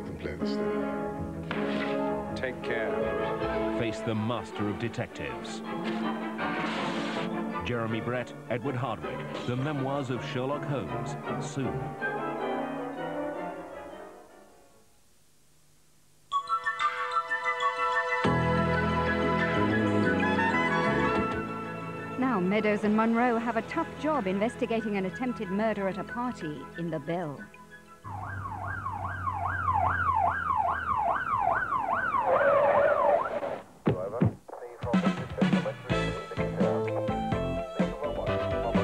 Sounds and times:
Music: 0.0 - 14.9, 16.3 - 29.2, 34.7 - 38.8
Speech: 7.6 - 11.8, 33.9 - 37.0
Police car (siren): 28.1 - 33.6.

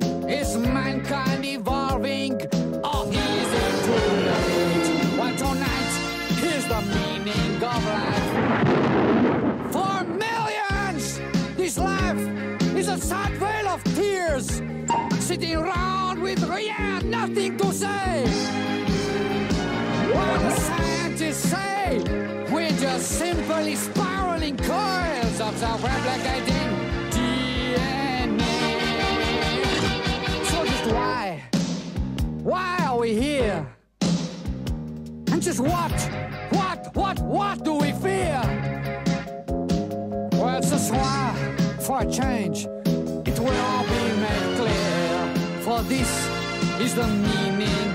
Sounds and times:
Music: 0.0 - 47.9
Speech: 0.3 - 3.4, 4.6 - 8.4, 9.7 - 18.3, 20.1 - 28.3, 30.4 - 31.6, 32.4 - 33.8, 35.3 - 38.6, 40.4 - 42.7, 43.3 - 44.1, 45.6 - 47.4.

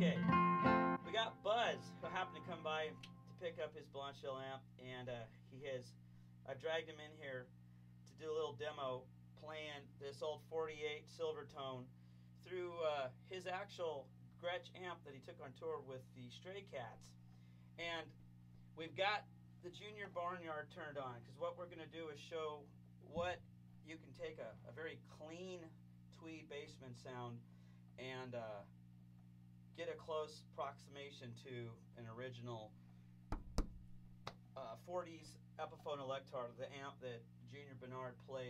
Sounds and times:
Speech: 0.0 - 0.2, 1.1 - 17.2, 17.8 - 18.2, 18.8 - 28.8, 29.7 - 32.8, 34.6 - 38.5.

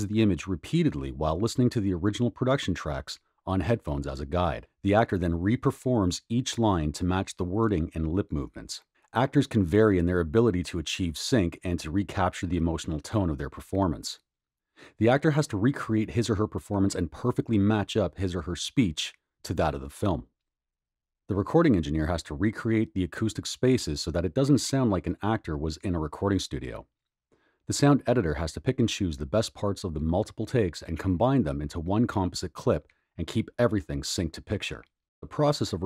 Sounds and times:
Speech: 0.0 - 14.2, 14.8 - 20.3, 21.3 - 26.9, 27.7 - 35.8.

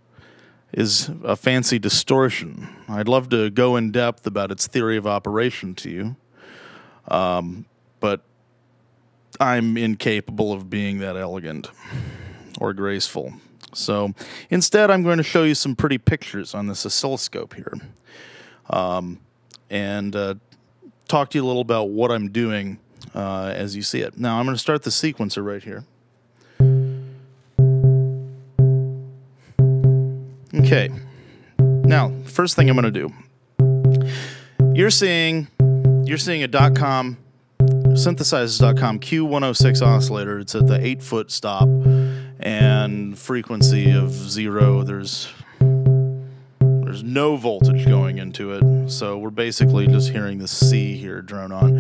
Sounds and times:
Speech: 0.7 - 6.2, 7.1 - 8.3, 9.4 - 11.8, 12.6 - 18.0, 18.7 - 20.4, 21.0 - 25.9, 30.5 - 31.1, 31.9 - 33.3, 34.8 - 35.5, 36.1 - 37.2, 38.0 - 41.7, 42.4 - 45.4, 46.9 - 51.8.

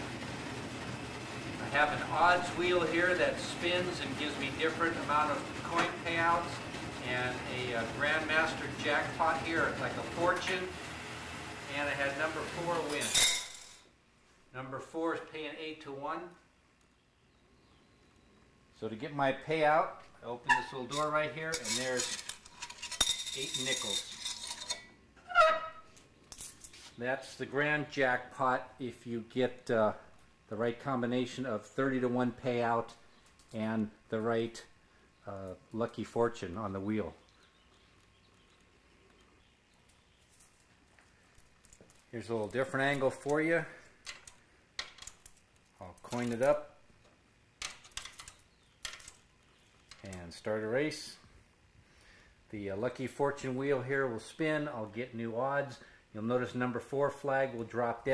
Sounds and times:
Speech: 1.6 - 10.8, 11.7 - 13.2, 14.5 - 16.4, 18.8 - 22.2, 23.4 - 24.1, 27.0 - 33.0, 33.6 - 37.2, 42.1 - 43.8, 45.8 - 46.8, 50.0 - 51.3, 52.5 - 58.1.

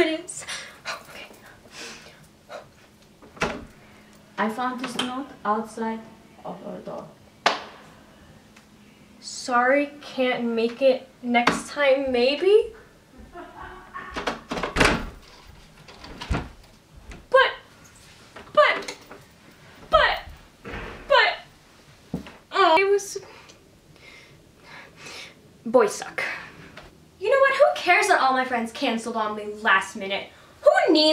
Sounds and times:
Speech: 0.0 - 0.5, 4.4 - 7.2, 9.2 - 12.8, 17.3 - 17.7, 18.6 - 18.9, 19.9 - 20.3, 21.1 - 21.5, 22.5 - 23.2, 25.6 - 26.4, 27.2 - 31.1
Door: 14.1 - 16.6.

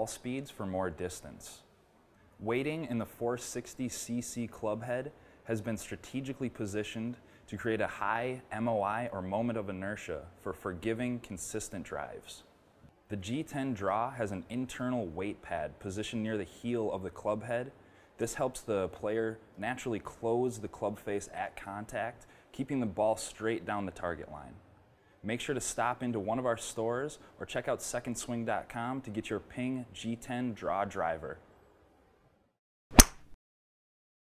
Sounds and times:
Speech: 0.0 - 1.7, 2.4 - 12.5, 13.1 - 31.5.

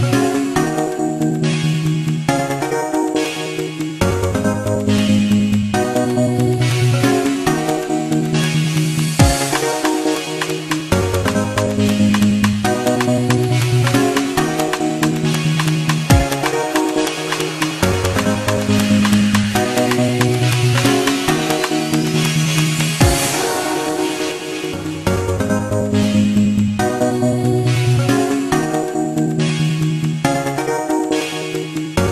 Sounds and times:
Dubstep: 5.8 - 32.1.

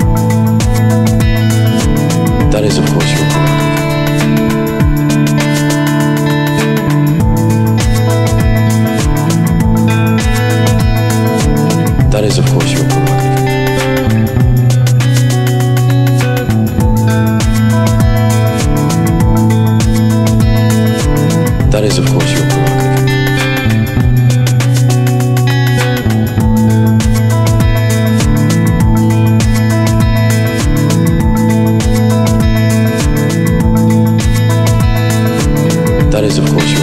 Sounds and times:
Techno: 0.0 - 36.8
Speech: 2.5 - 3.6, 12.0 - 13.4, 21.6 - 22.9, 36.1 - 36.8.

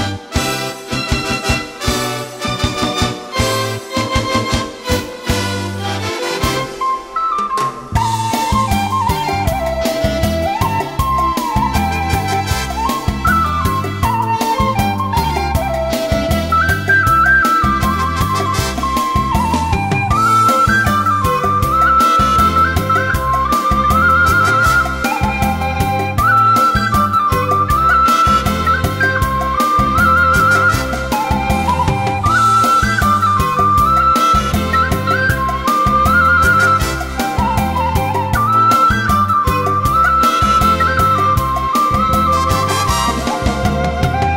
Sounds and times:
Flute: 0.0 - 44.3.

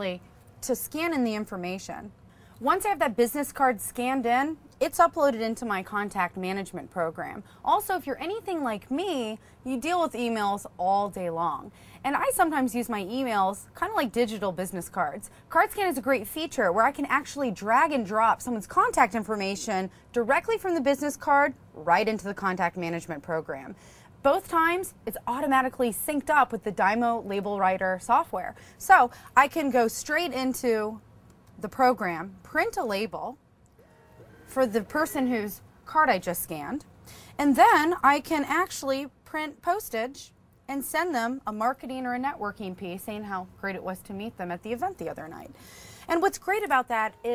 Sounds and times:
Speech: 0.0 - 31.0, 34.5 - 36.8, 37.4 - 45.5, 46.1 - 47.3.

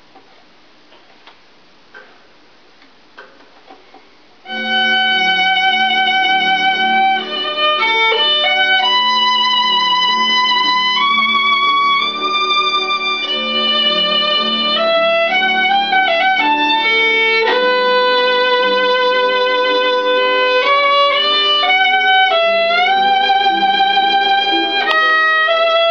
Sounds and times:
Violin, fiddle: 4.5 - 25.9.

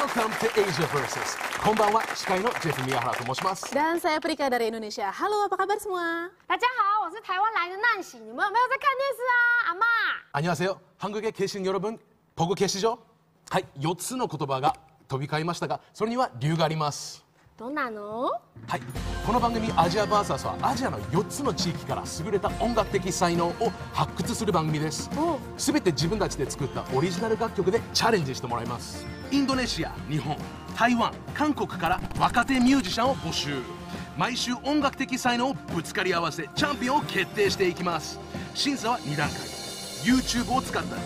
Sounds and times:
Music: 0.0 - 3.5, 18.6 - 41.0.

